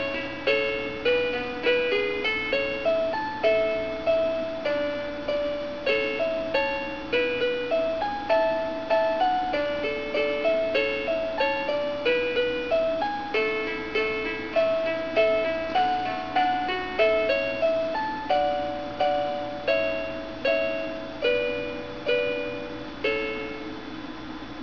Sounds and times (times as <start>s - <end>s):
Lullaby: 0.0s - 24.6s.